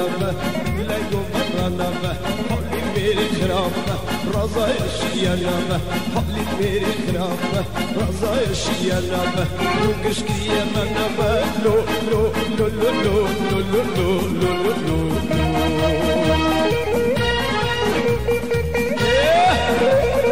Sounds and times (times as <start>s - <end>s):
Music: 0.0s - 20.3s.